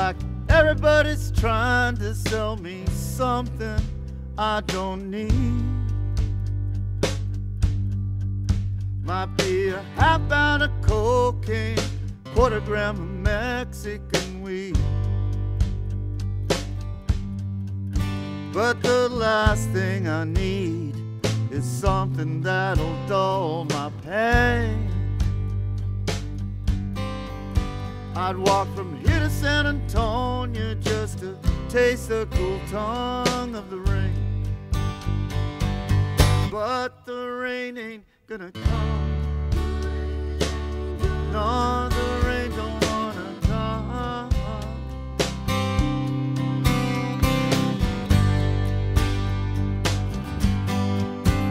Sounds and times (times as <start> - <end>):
Music: 0.0 - 51.5.